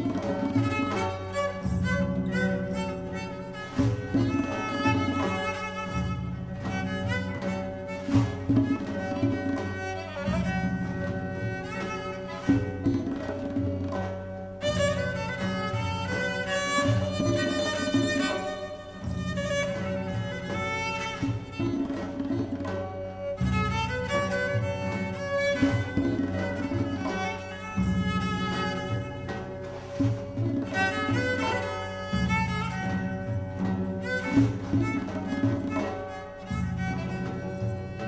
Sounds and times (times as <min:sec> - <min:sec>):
Bowed string instrument: 0:00.0 - 0:38.0.